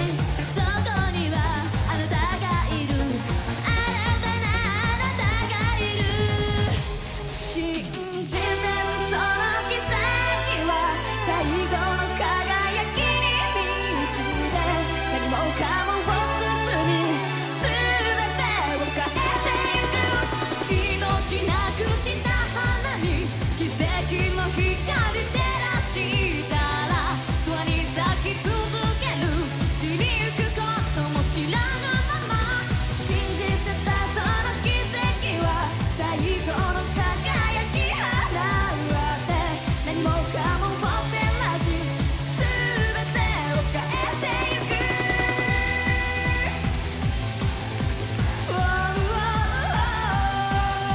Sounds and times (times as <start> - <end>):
Singing: 0.0 - 46.8, 48.2 - 50.9
Music: 0.0 - 50.9.